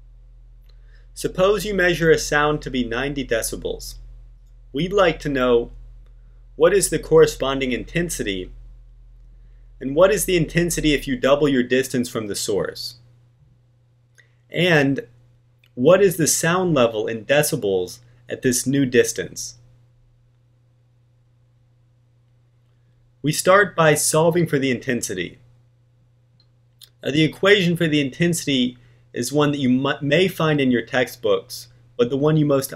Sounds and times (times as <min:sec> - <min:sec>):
Speech: 0:01.2 - 0:04.0, 0:04.8 - 0:05.7, 0:06.6 - 0:08.6, 0:09.8 - 0:13.0, 0:14.5 - 0:15.1, 0:15.8 - 0:19.6, 0:23.2 - 0:25.4, 0:26.8 - 0:32.7.